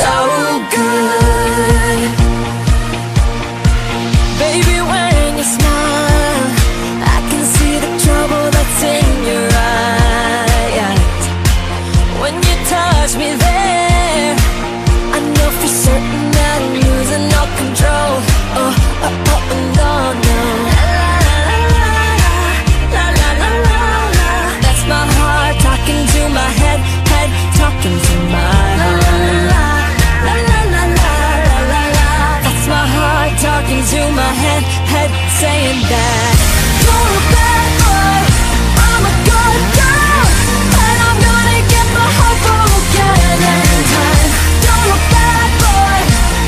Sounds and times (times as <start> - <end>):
Pop music: 0.0 - 46.4.